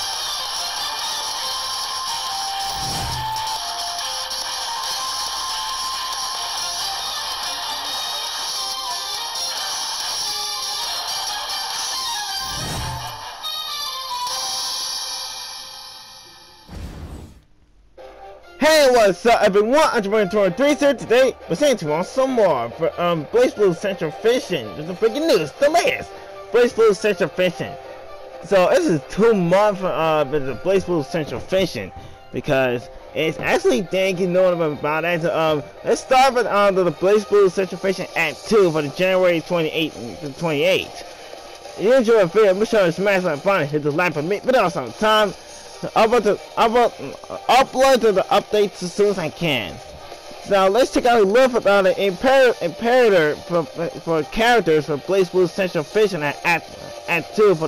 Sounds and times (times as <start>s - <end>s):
Music: 0.0s - 17.0s, 17.9s - 57.6s
Speech: 18.6s - 27.8s, 28.5s - 41.0s, 41.8s - 49.8s, 50.5s - 57.6s.